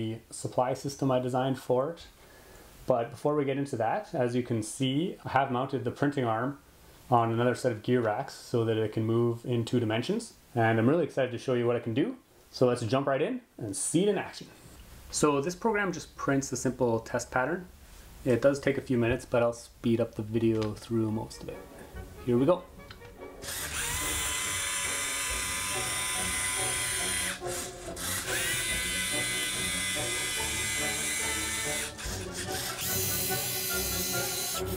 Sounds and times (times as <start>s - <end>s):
Music: 20.7s - 34.7s
Printer: 23.5s - 34.7s.